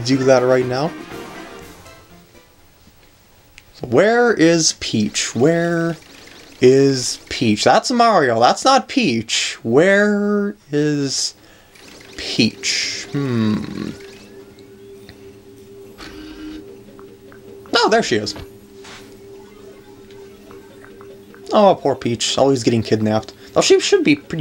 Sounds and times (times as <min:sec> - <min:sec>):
Speech: 0:00.0 - 0:00.9, 0:03.8 - 0:06.0, 0:06.6 - 0:11.4, 0:17.7 - 0:18.4, 0:21.5 - 0:24.4.